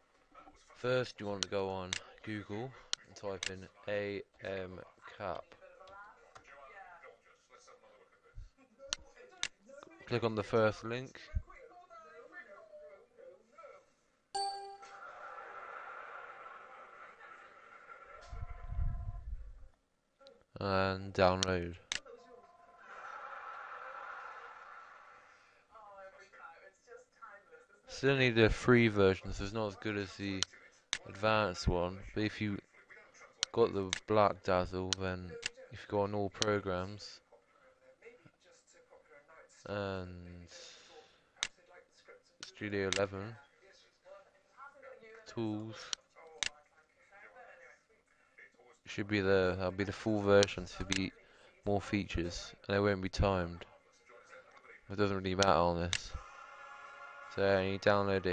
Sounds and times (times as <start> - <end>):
Speech: 0.3 - 13.9, 20.2 - 22.6, 25.8 - 56.2, 57.3 - 58.3.